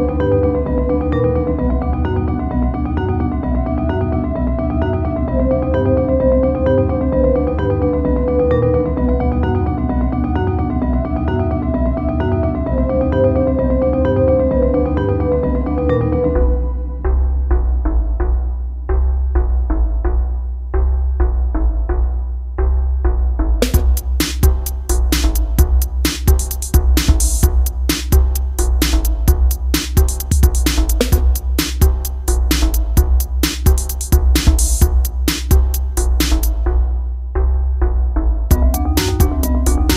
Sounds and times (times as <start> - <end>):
Drum machine: 23.6 - 37.0, 38.5 - 39.9.